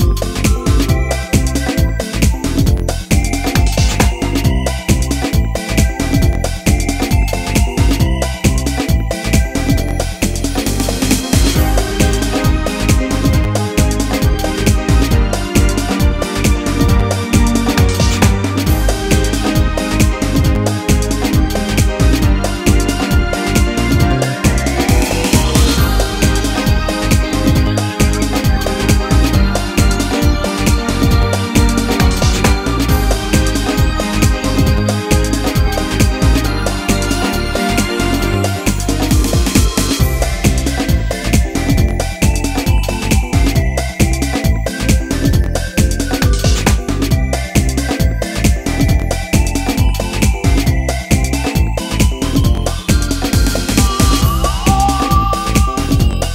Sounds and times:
Soundtrack music: 0.0 - 56.3.

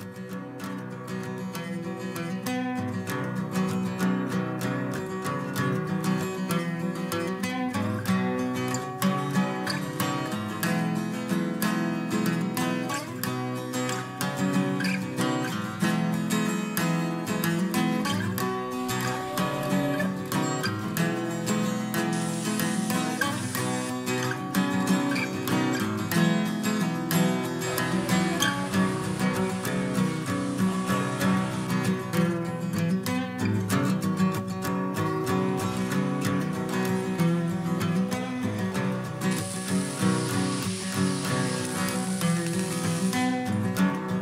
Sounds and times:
Music: 0.0 - 44.2.

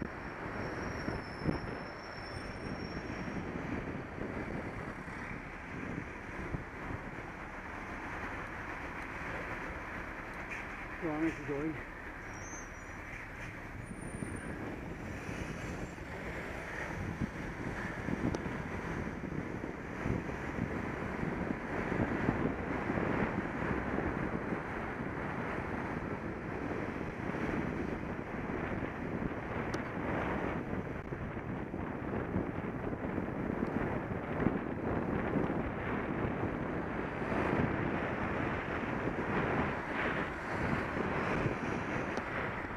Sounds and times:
Vehicle: 0.0 - 42.7.

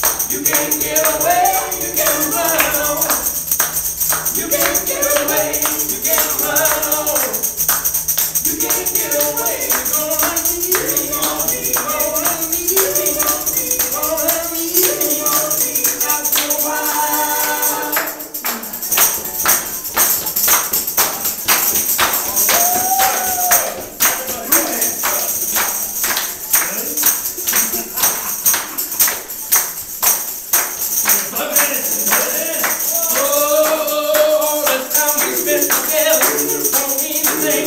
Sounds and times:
Music: 0.0 - 37.6.

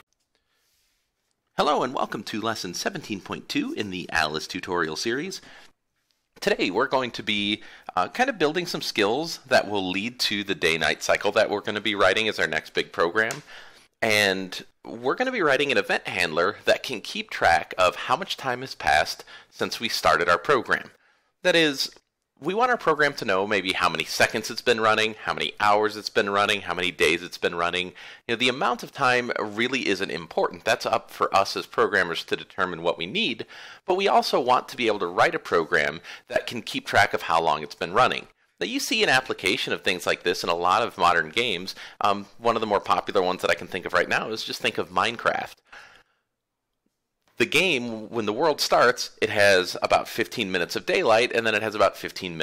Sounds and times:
Speech: 1.6 - 5.5, 6.4 - 45.6, 47.4 - 52.4.

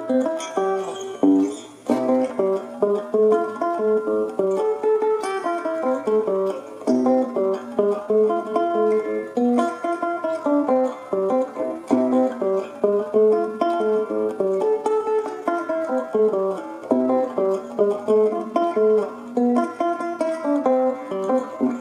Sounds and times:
Ukulele: 0.0 - 10.4, 11.0 - 21.8
Guitar: 0.0 - 21.8.

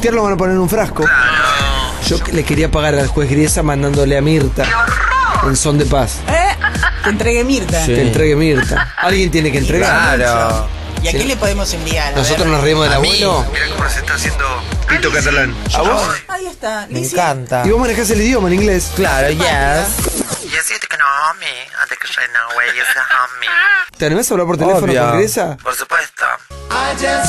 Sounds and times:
Music: 0.0 - 16.3, 17.6 - 20.6, 26.5 - 27.2
Radio: 13.0 - 15.5, 19.7 - 23.9, 25.6 - 26.5
Speech: 20.8 - 26.4.

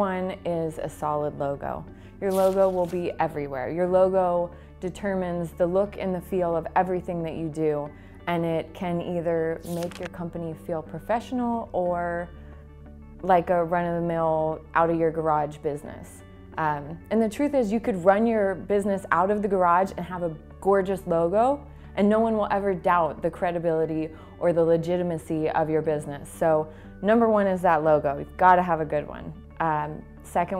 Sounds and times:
Speech: 0.0 - 12.3, 13.2 - 30.5
Music: 0.0 - 30.5.

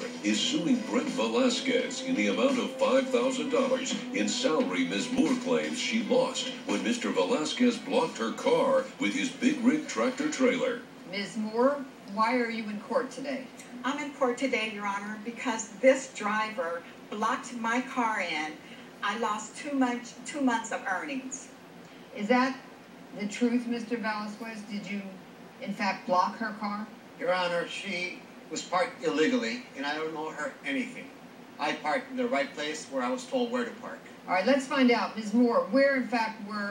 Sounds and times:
Speech: 0.2 - 21.5, 23.2 - 36.7.

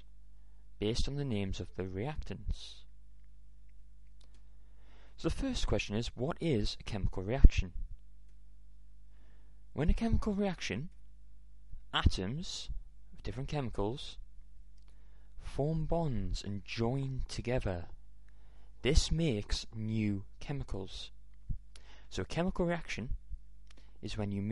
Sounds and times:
Speech: 0.8 - 2.9, 5.2 - 7.8, 9.8 - 11.0, 11.9 - 14.2, 15.4 - 18.0, 18.8 - 21.2, 22.1 - 23.2, 24.0 - 24.5.

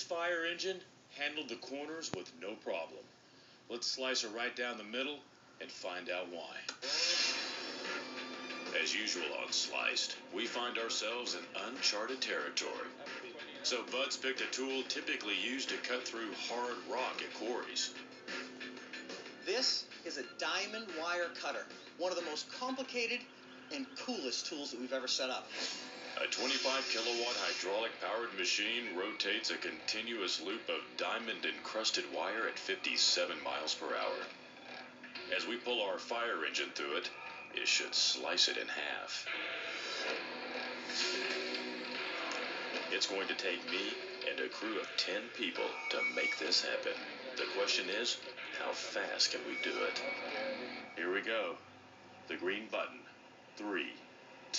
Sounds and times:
Speech: 0.0 - 3.1, 3.7 - 6.7, 8.8 - 18.0, 19.5 - 25.5, 26.2 - 34.3, 35.3 - 39.3, 42.9 - 50.0, 51.0 - 51.6, 52.3 - 54.0.

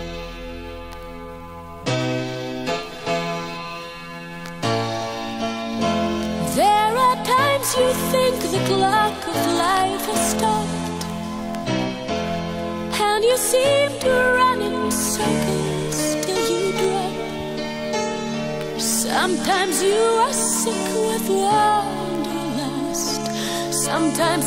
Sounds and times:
Music: 0.0 - 24.4.

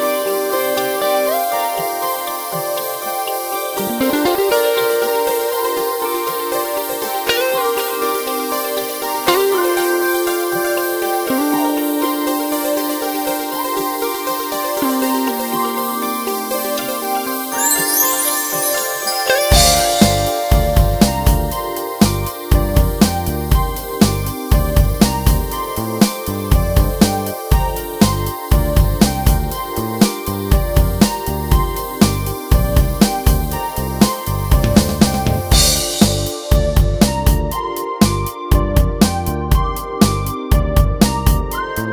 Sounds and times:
Music: 0.0 - 41.9.

